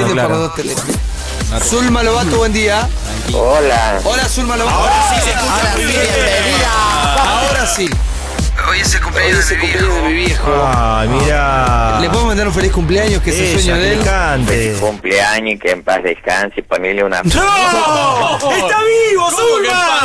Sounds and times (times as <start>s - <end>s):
Speech: 0.0s - 8.0s, 8.6s - 20.0s
Music: 0.0s - 15.6s.